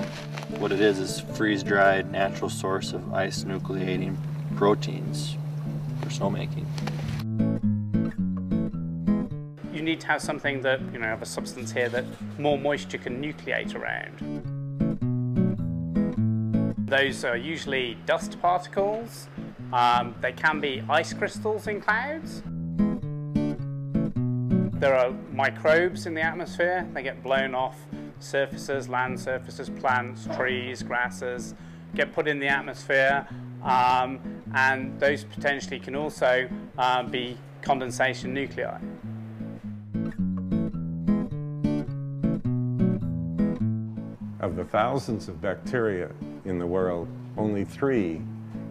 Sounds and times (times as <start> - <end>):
Acoustic guitar: 0.0 - 48.7
Speech: 0.6 - 5.4, 6.0 - 6.7, 9.7 - 14.2, 16.9 - 22.4, 24.8 - 38.8, 44.4 - 48.3.